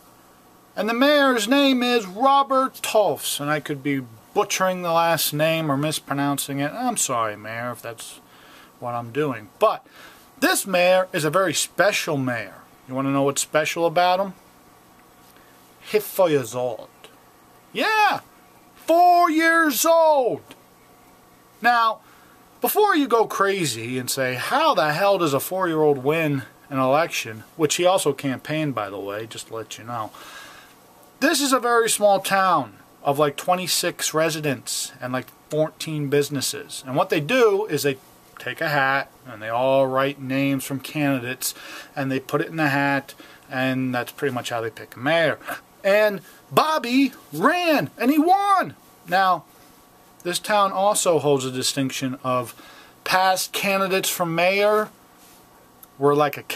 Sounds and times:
Speech: 0:00.8 - 0:08.2, 0:08.8 - 0:14.4, 0:15.8 - 0:17.1, 0:17.8 - 0:20.6, 0:21.6 - 0:22.0, 0:22.6 - 0:30.2, 0:31.2 - 0:49.5, 0:50.2 - 0:55.0, 0:56.0 - 0:56.5.

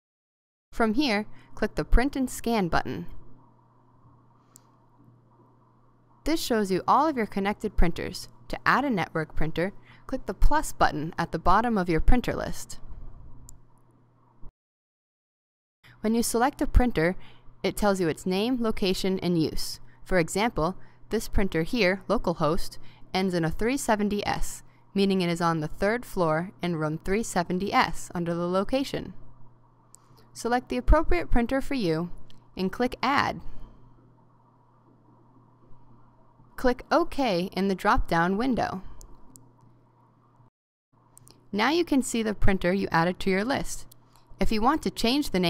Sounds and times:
Speech: 0:00.8 - 0:03.2, 0:06.3 - 0:12.8, 0:16.0 - 0:29.2, 0:30.4 - 0:33.5, 0:36.6 - 0:38.9, 0:41.6 - 0:45.5.

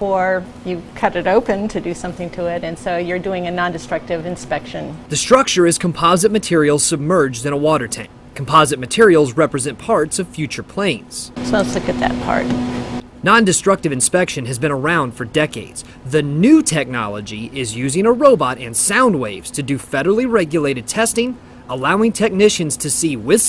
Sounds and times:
Speech: 0:00.0 - 0:12.6, 0:13.2 - 0:23.4.

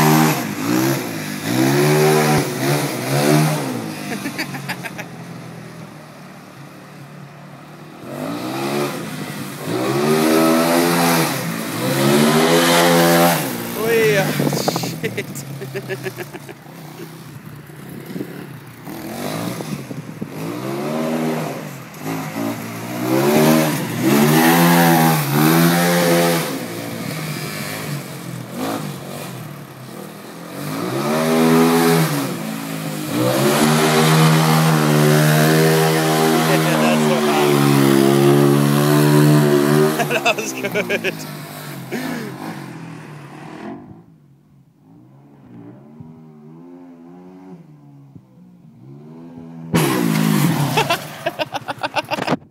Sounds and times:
Speech: 0:13.8 - 0:15.4, 0:36.5 - 0:37.6, 0:40.1 - 0:41.2.

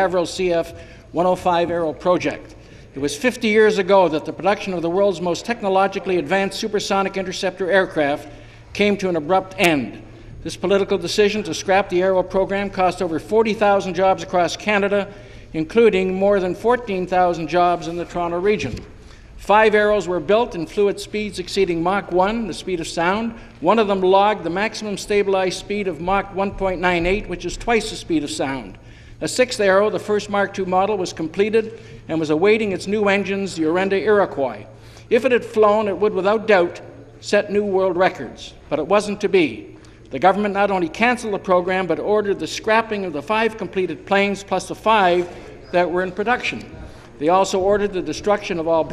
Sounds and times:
Speech: 0:00.0 - 0:48.9.

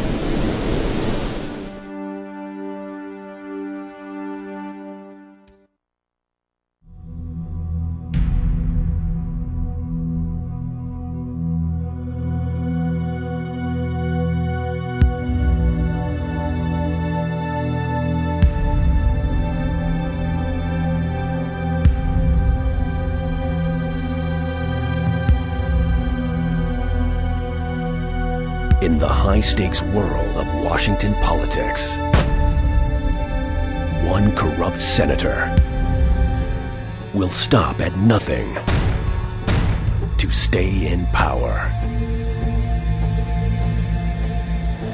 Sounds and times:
Music: 0:01.5 - 0:05.9, 0:06.7 - 0:44.9
Speech: 0:28.8 - 0:32.0, 0:33.9 - 0:35.6, 0:37.1 - 0:38.7, 0:40.2 - 0:41.8.

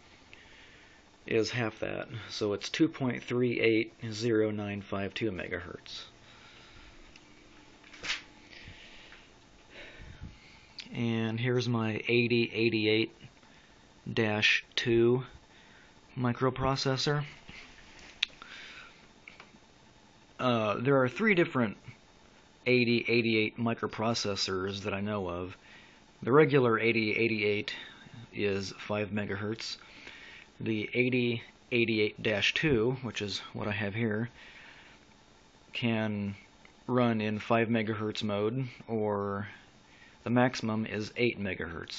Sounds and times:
Inside, small room: 0:00.0 - 0:41.9
Speech: 0:01.3 - 0:06.2, 0:10.8 - 0:13.3, 0:14.1 - 0:15.4, 0:16.1 - 0:17.4, 0:20.4 - 0:22.0, 0:22.6 - 0:25.6, 0:26.2 - 0:29.8, 0:30.6 - 0:34.4, 0:35.7 - 0:39.6, 0:40.2 - 0:41.9.

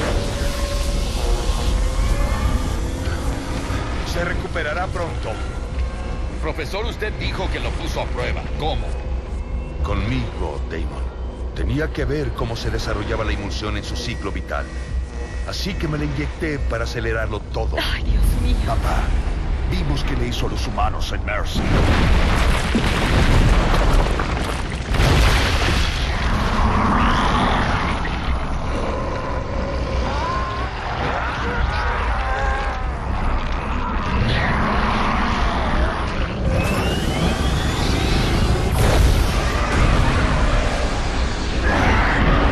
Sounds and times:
Music: 0:00.0 - 0:24.1.

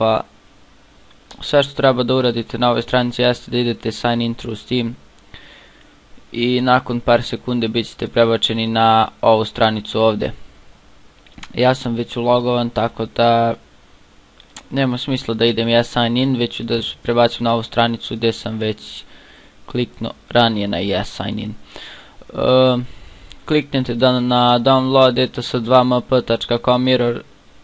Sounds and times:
Speech: 0:00.0 - 0:00.3, 0:01.3 - 0:05.0, 0:06.3 - 0:10.4, 0:11.4 - 0:13.6, 0:14.6 - 0:19.1, 0:19.7 - 0:21.6, 0:22.2 - 0:27.3.

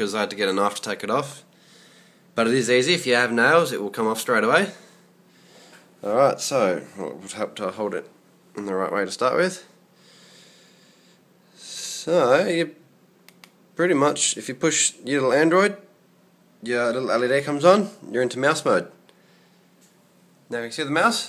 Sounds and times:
Speech: 0:00.0 - 0:01.5, 0:02.4 - 0:04.9, 0:06.0 - 0:09.8, 0:11.6 - 0:12.8, 0:13.8 - 0:15.9, 0:16.6 - 0:19.0, 0:20.5 - 0:21.2.

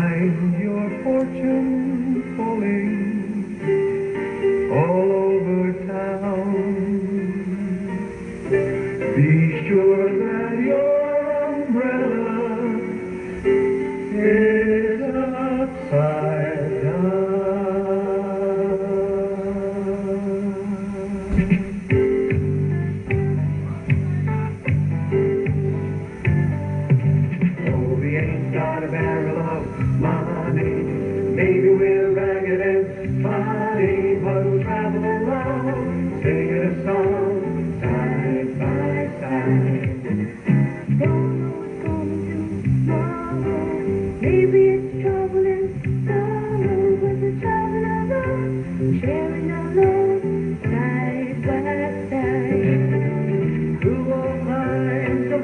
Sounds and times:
Male singing: 0:00.0 - 0:03.7, 0:04.7 - 0:07.9, 0:09.1 - 0:13.0, 0:14.0 - 0:21.4, 0:27.6 - 0:53.2, 0:53.8 - 0:55.4
Music: 0:00.0 - 0:55.4.

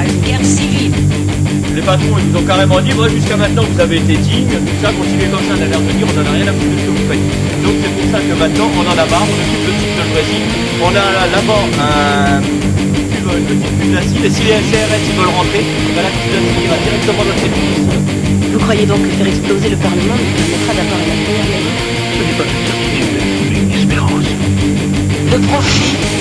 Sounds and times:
Speech: 0:00.0 - 0:00.9, 0:01.7 - 0:12.5, 0:13.2 - 0:17.9, 0:18.5 - 0:24.4, 0:25.3 - 0:26.2
Music: 0:00.0 - 0:26.2.

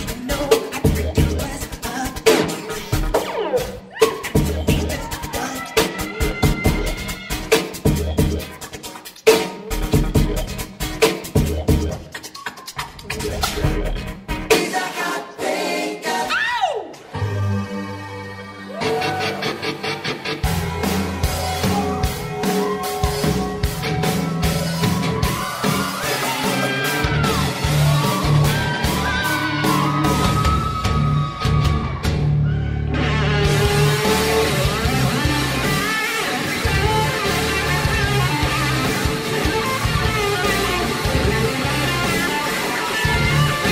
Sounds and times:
Scratching (performance technique): 0:00.0 - 0:15.6.

